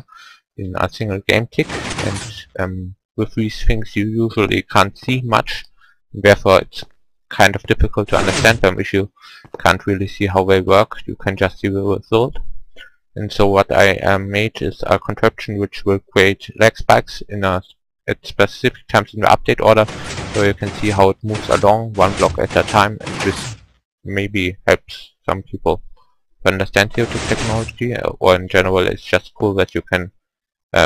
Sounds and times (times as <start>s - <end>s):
Speech: 0.0s - 12.5s, 13.2s - 25.8s, 26.4s - 30.8s.